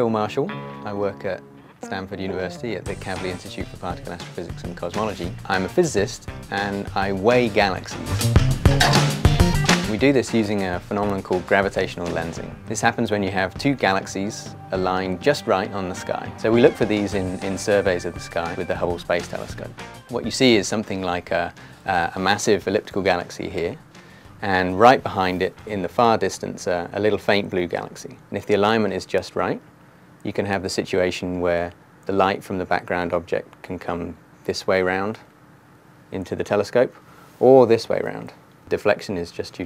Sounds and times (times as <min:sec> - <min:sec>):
Speech: 0:00.0 - 0:08.2, 0:09.9 - 0:23.8, 0:24.4 - 0:29.6, 0:30.2 - 0:35.3, 0:36.1 - 0:39.6
Music: 0:00.0 - 0:27.2.